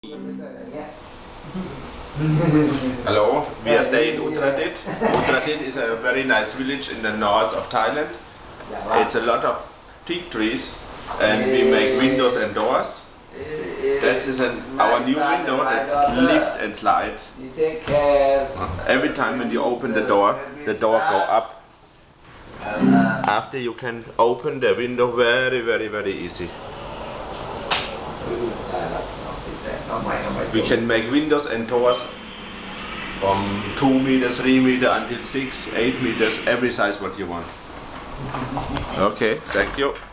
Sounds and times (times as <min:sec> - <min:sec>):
Speech: 0:00.0 - 0:01.0, 0:01.6 - 0:21.6, 0:22.6 - 0:26.5, 0:28.2 - 0:32.2, 0:33.2 - 0:37.6, 0:38.9 - 0:40.0.